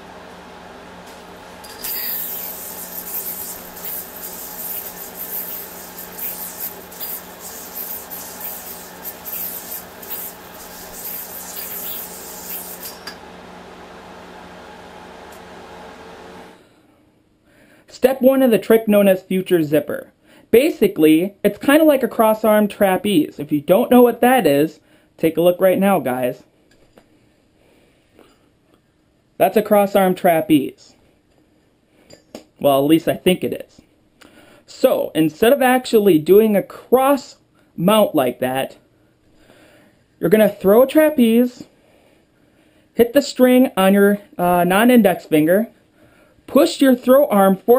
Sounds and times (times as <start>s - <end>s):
Speech: 17.9s - 26.5s, 29.4s - 31.0s, 32.6s - 33.8s, 34.7s - 38.8s, 40.2s - 41.7s, 43.0s - 45.7s, 46.5s - 47.7s.